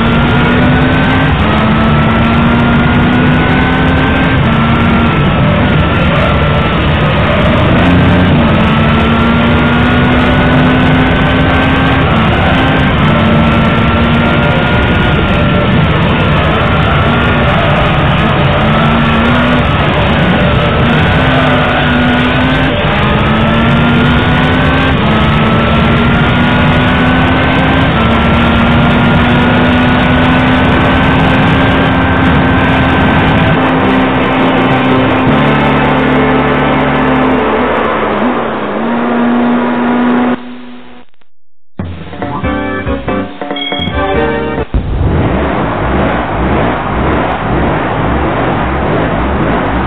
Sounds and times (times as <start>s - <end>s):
Hammond organ: 42.0s - 44.8s.